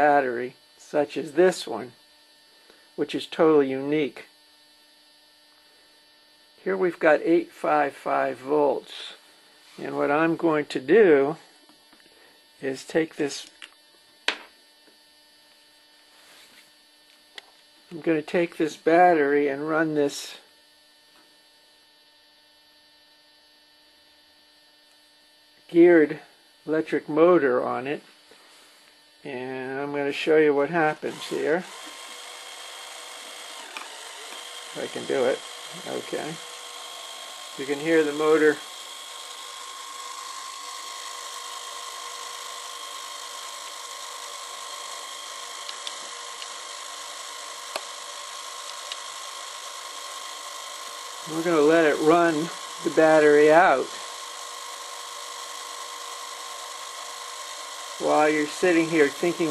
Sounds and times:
Speech: 0.0s - 2.0s, 3.0s - 4.3s, 6.6s - 9.2s, 9.8s - 11.4s, 12.6s - 13.5s, 17.9s - 20.4s, 25.7s - 28.1s, 29.2s - 31.7s, 34.8s - 36.4s, 37.6s - 38.6s, 51.3s - 54.0s, 58.0s - 59.5s.

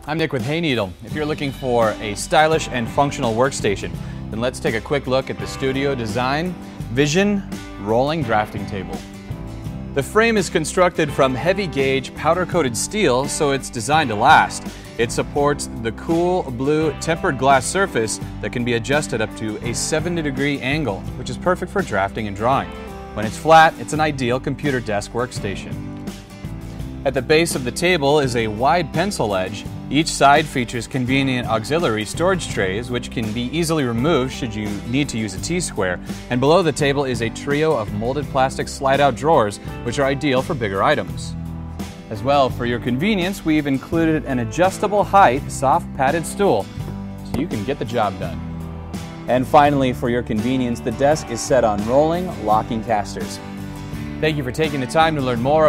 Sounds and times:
Speech: 0.0s - 9.0s, 10.0s - 25.8s, 27.0s - 41.3s, 42.1s - 46.7s, 47.3s - 48.4s, 49.3s - 53.4s, 54.2s - 55.6s
Music: 0.0s - 55.6s.

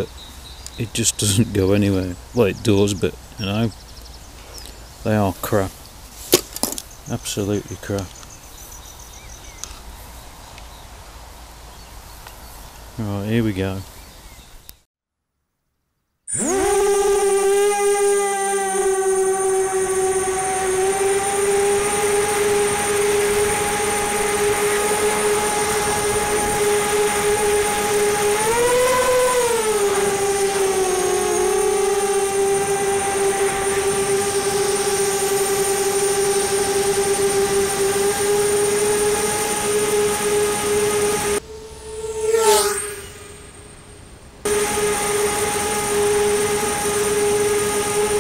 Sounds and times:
Insect: 5.7s - 13.0s.

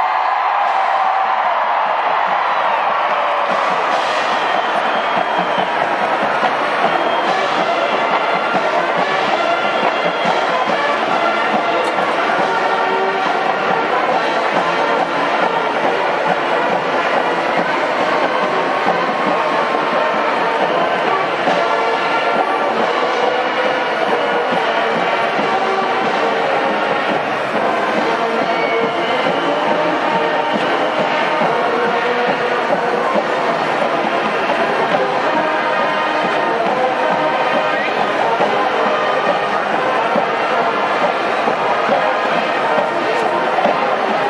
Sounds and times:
Music: 0.0s - 44.3s.

